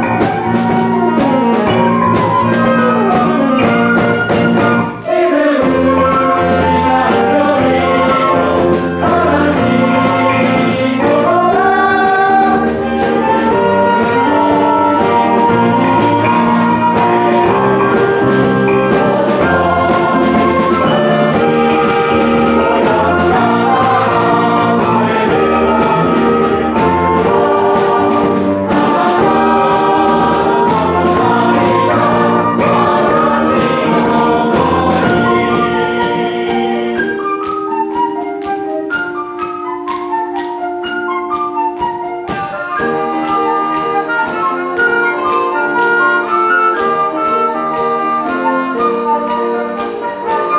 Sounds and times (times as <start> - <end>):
Choir: 0.0 - 40.5, 42.2 - 50.5.